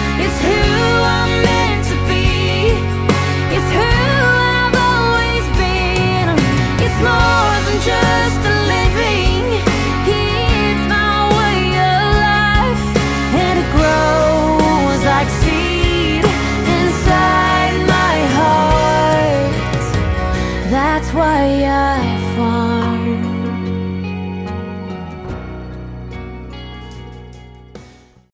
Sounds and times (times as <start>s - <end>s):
Funk: 0.0s - 21.2s
Bluegrass: 0.0s - 27.8s
Soundtrack music: 0.0s - 28.3s.